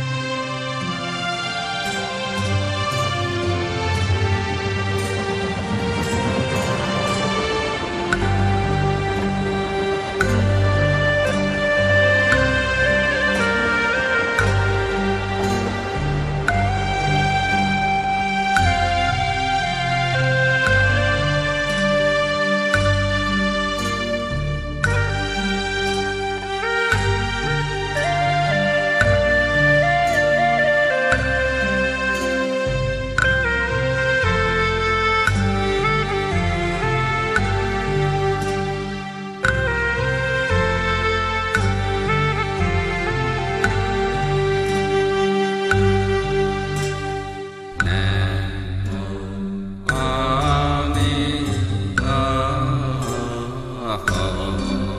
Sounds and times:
Mantra: 0:47.8 - 0:54.9.

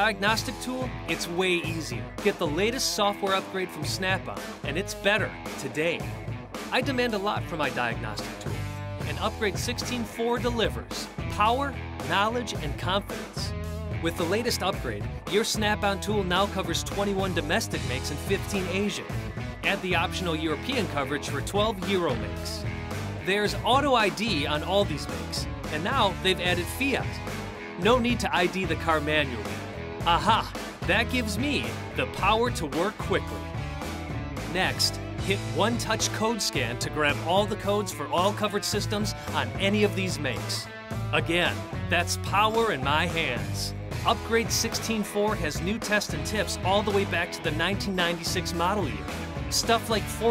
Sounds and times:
Speech: 0:00.0 - 0:06.1, 0:06.7 - 0:22.6, 0:23.2 - 0:27.2, 0:27.8 - 0:33.4, 0:34.5 - 0:50.3
Music: 0:00.0 - 0:50.3.

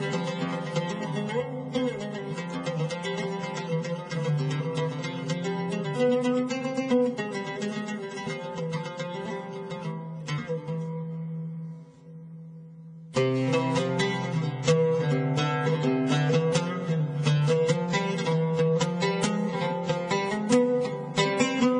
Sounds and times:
Middle Eastern music: 0:00.0 - 0:21.7.

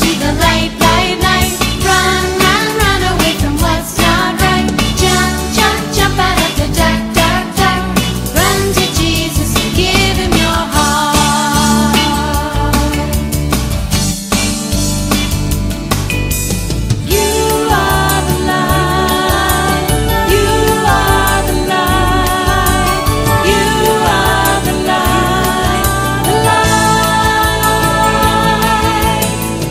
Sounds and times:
Christian music: 0:00.0 - 0:29.7
Singing: 0:17.1 - 0:29.7.

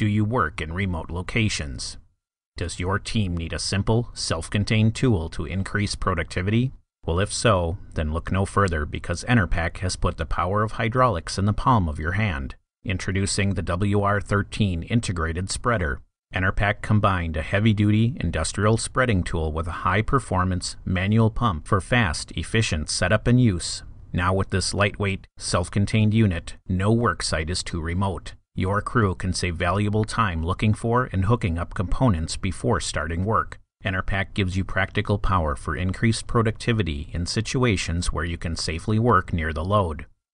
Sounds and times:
Speech: 0:00.0 - 0:40.2.

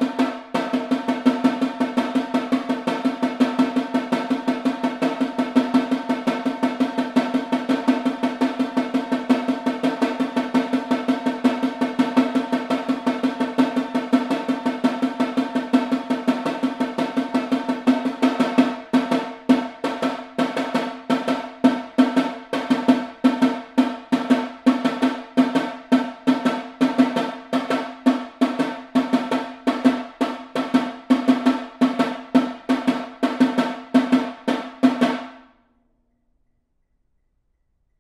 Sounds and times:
Snare drum: 0:00.0 - 0:35.5.

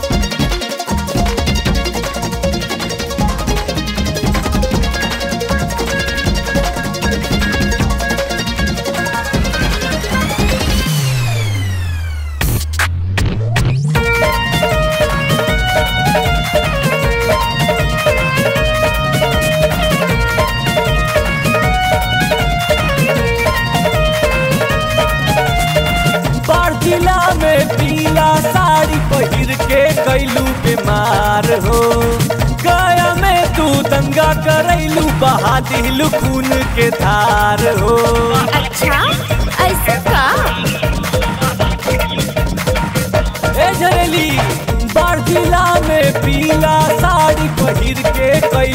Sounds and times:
Music: 0:00.0 - 0:48.7
Outside, urban or manmade: 0:00.0 - 0:48.7.

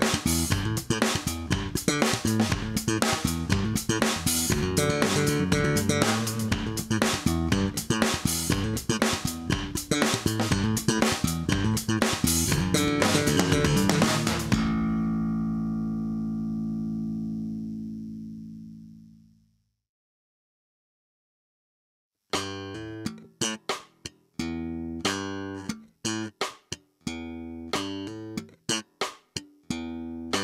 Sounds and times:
Electric guitar: 0:00.0 - 0:19.0
Strum: 0:00.0 - 0:19.3.

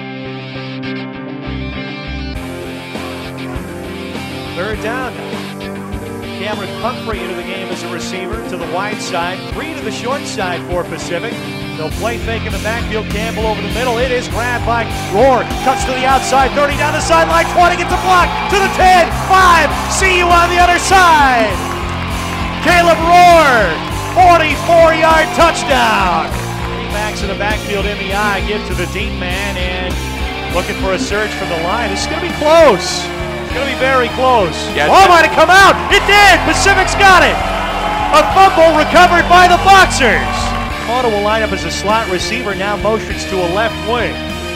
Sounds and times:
Music: 0:00.0 - 0:44.5
Speech: 0:04.6 - 0:05.2, 0:06.4 - 0:21.6, 0:22.6 - 0:26.3, 0:27.0 - 0:29.9, 0:30.6 - 0:37.4, 0:38.2 - 0:44.2.

